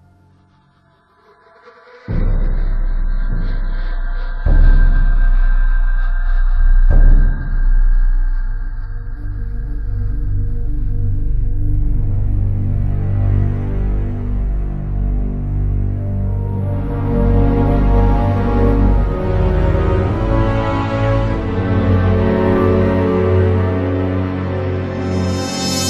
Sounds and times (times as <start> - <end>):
Music: 0.0 - 25.8.